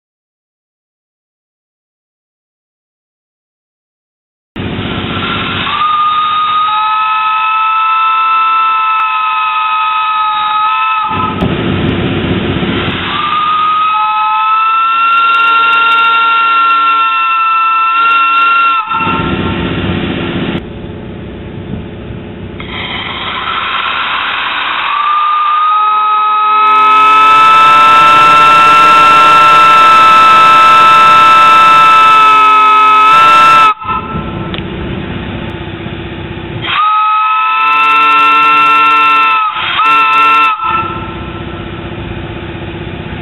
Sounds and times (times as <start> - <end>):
Steam whistle: 4.9 - 11.4, 12.9 - 19.6, 22.6 - 34.6, 36.6 - 41.5.